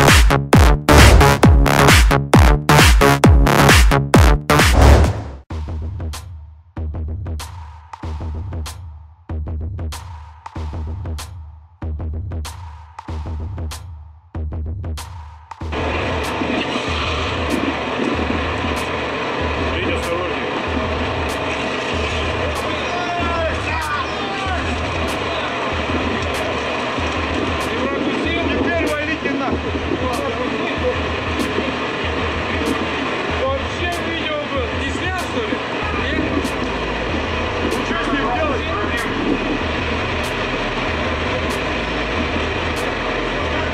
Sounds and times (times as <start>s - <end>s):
Music: 0.0s - 43.7s
Speech: 19.7s - 20.5s, 22.4s - 25.6s, 27.6s - 31.1s, 32.4s - 36.6s, 37.7s - 39.4s.